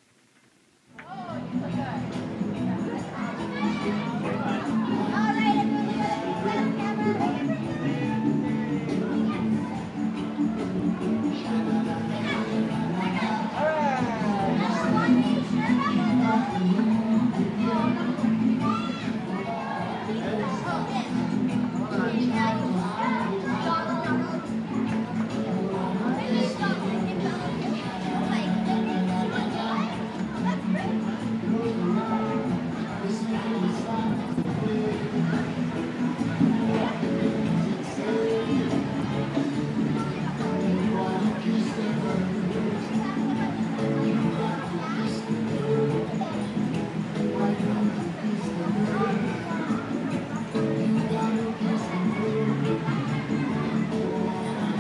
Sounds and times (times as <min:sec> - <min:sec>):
Music: 0:00.9 - 0:54.8
Speech: 0:01.0 - 0:54.8.